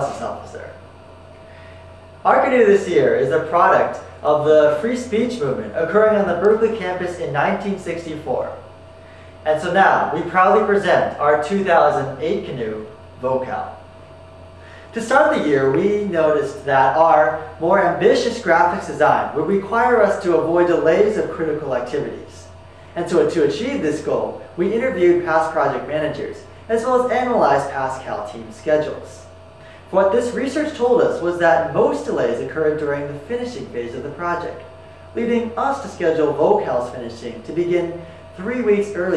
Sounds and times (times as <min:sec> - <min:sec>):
Speech: 0:00.0 - 0:00.8, 0:02.2 - 0:08.7, 0:09.4 - 0:13.8, 0:14.9 - 0:29.3, 0:29.9 - 0:39.1.